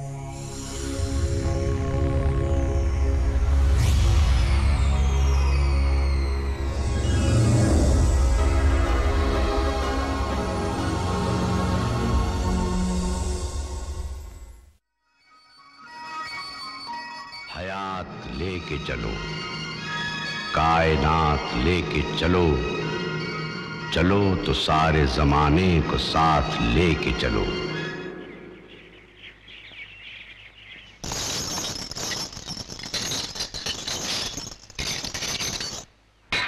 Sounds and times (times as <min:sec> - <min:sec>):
Outside, rural or natural: 0:00.0 - 0:15.0, 0:16.2 - 0:36.4
Music: 0:00.0 - 0:28.8
Speech: 0:17.5 - 0:19.3, 0:20.6 - 0:22.8, 0:24.0 - 0:27.7.